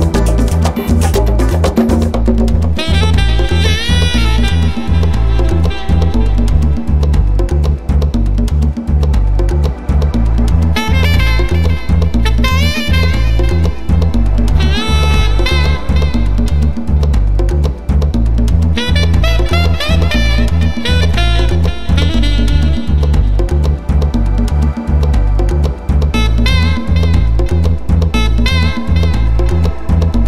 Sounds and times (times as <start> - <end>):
Salsa music: 0.0 - 30.2.